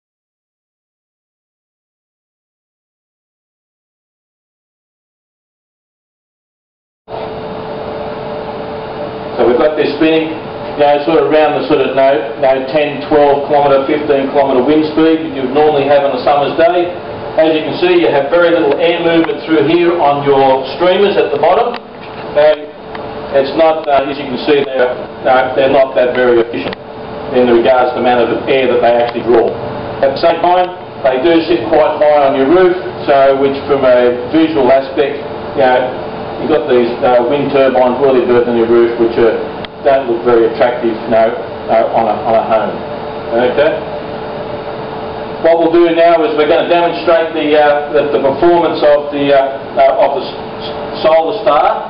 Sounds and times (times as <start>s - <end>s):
Speech: 9.4s - 43.9s, 45.4s - 51.9s.